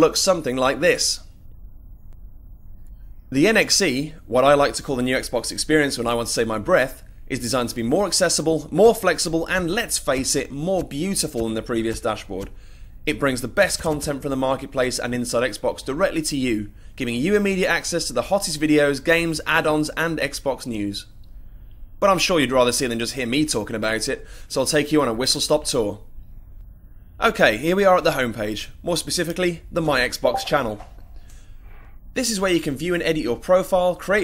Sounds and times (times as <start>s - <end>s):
Speech: 0.0s - 1.3s, 3.3s - 12.5s, 13.1s - 21.1s, 22.0s - 26.0s, 27.2s - 30.8s, 32.2s - 34.2s.